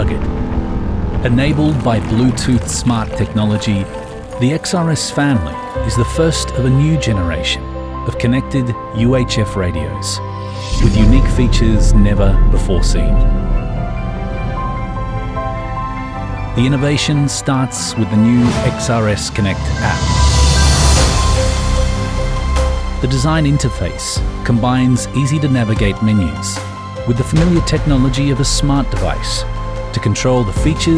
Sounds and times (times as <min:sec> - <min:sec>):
Speech: 0:00.0 - 0:00.3, 0:01.2 - 0:13.3, 0:16.6 - 0:20.4, 0:23.0 - 0:30.9
Music: 0:00.0 - 0:30.9.